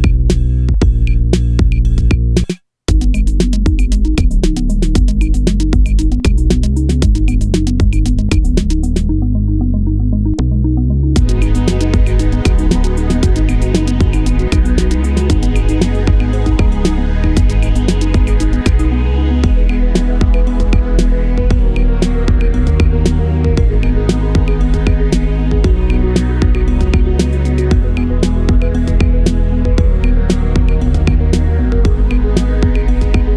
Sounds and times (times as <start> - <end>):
Music: 0.0 - 33.3.